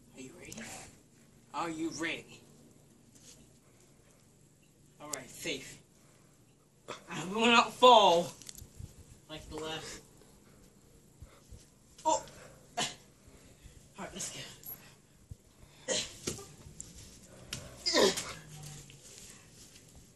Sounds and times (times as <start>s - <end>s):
Speech: 1.5s - 2.4s, 5.0s - 5.8s, 7.1s - 8.4s, 9.3s - 10.0s, 14.0s - 14.6s.